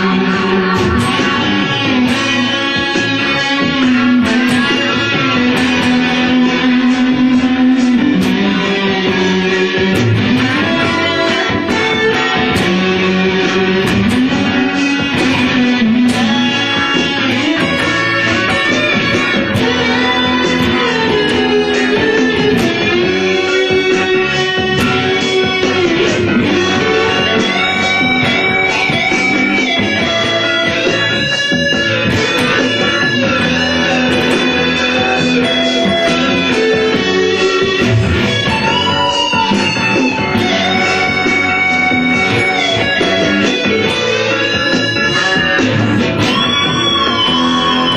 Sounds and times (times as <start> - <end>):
Guitar: 0.0 - 47.9.